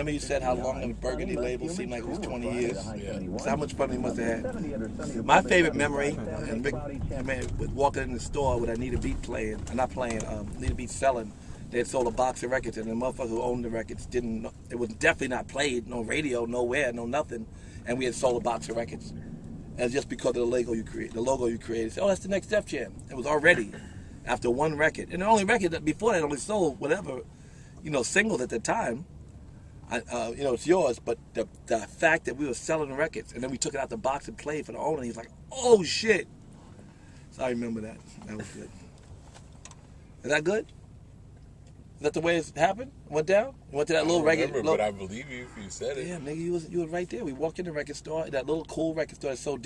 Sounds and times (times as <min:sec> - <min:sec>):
Speech: 0:00.0 - 0:19.1, 0:29.9 - 0:36.3, 0:42.0 - 0:49.6.